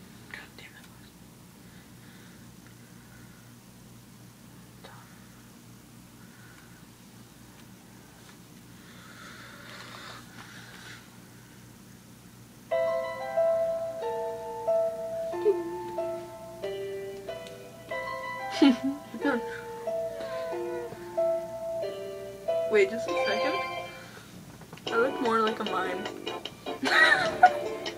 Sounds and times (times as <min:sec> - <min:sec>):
Whispering: 0:00.3 - 0:01.2, 0:04.8 - 0:05.4.